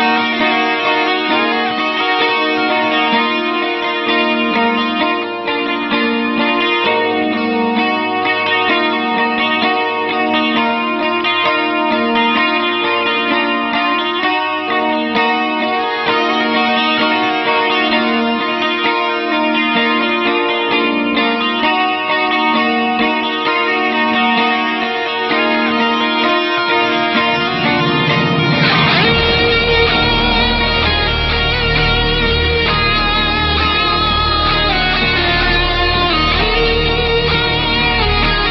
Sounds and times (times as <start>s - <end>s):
Electric guitar: 0.0s - 38.5s.